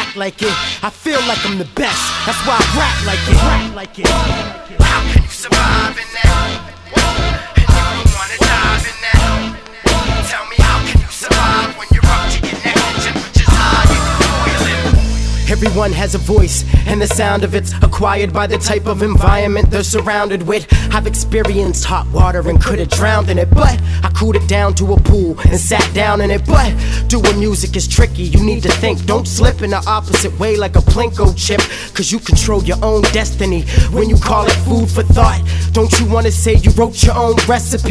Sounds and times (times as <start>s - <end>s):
Music: 0.0s - 37.9s.